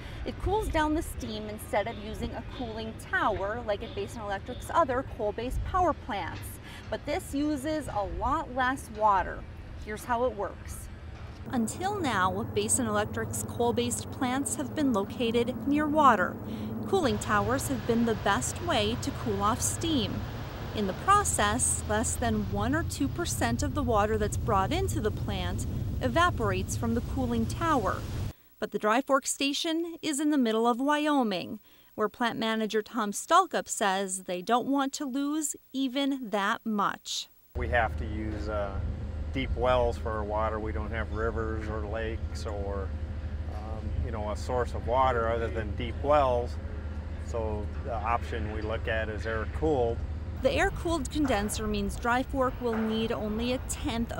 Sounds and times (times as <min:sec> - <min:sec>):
Speech: 0:00.3 - 0:10.8, 0:11.5 - 0:20.2, 0:20.8 - 0:28.0, 0:28.6 - 0:38.8, 0:39.4 - 0:42.9, 0:43.6 - 0:46.6, 0:47.3 - 0:54.1.